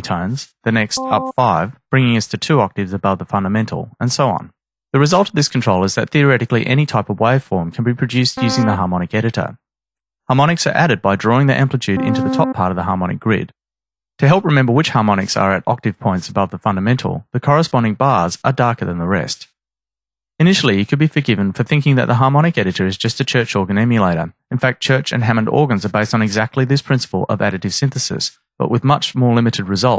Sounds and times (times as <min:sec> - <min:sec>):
Speech synthesizer: 0:00.0 - 0:09.6, 0:10.3 - 0:13.5, 0:14.2 - 0:19.5, 0:20.4 - 0:29.9
Synthesizer: 0:01.0 - 0:01.5, 0:08.4 - 0:08.8, 0:12.0 - 0:12.7.